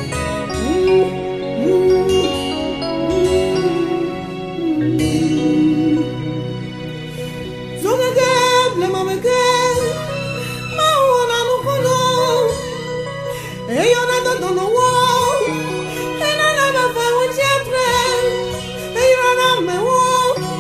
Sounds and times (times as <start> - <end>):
Gospel music: 0.0 - 20.6.